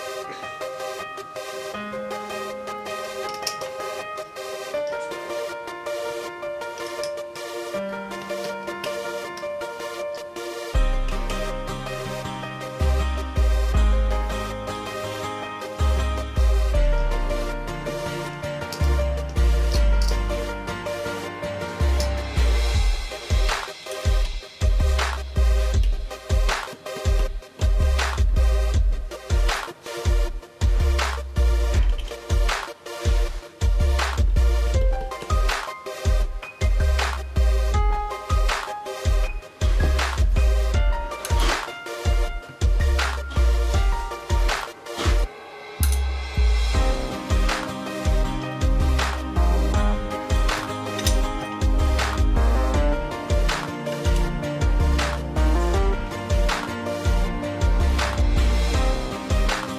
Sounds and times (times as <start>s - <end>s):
Music: 0.0s - 59.7s.